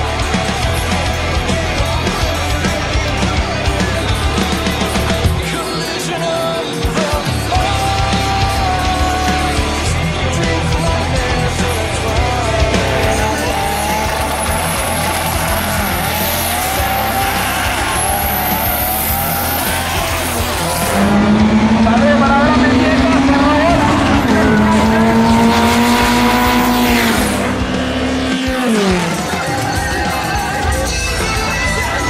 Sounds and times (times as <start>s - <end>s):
Speech: 19.5s - 26.4s.